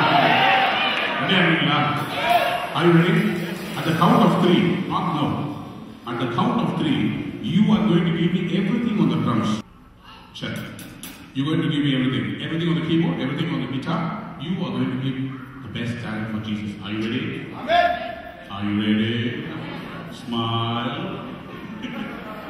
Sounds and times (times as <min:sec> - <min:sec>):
Speech: 0:01.2 - 0:09.6, 0:11.4 - 0:21.3.